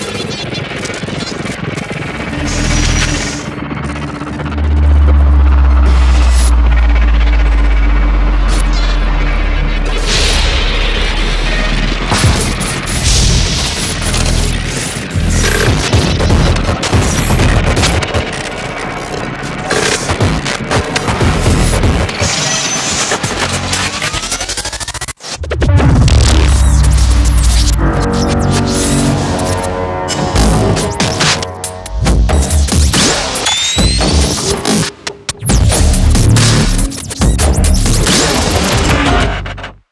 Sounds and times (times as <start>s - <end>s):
Electronica: 0.0s - 39.6s.